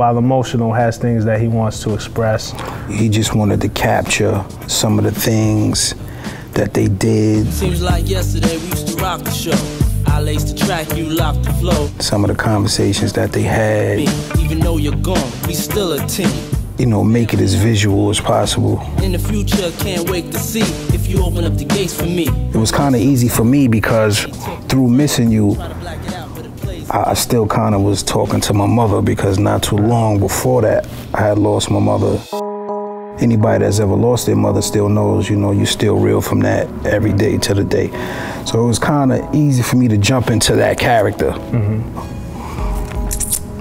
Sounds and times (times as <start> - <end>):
Speech: 0.0 - 9.5, 10.2 - 15.0, 16.8 - 19.2, 22.6 - 32.3, 33.2 - 41.4
Music: 2.9 - 43.6.